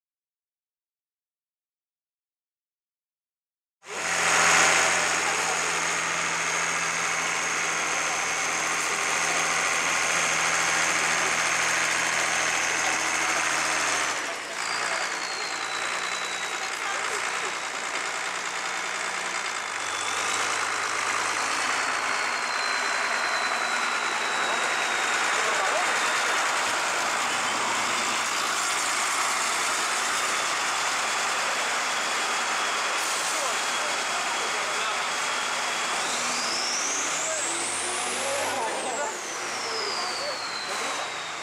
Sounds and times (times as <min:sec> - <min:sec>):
Vehicle: 0:03.8 - 0:41.4
Accelerating, revving, vroom: 0:03.9 - 0:15.2, 0:19.7 - 0:41.4
Speech: 0:04.8 - 0:06.0, 0:07.9 - 0:09.9, 0:10.6 - 0:11.6, 0:14.2 - 0:18.2, 0:24.3 - 0:26.4, 0:32.8 - 0:35.9, 0:37.0 - 0:41.2.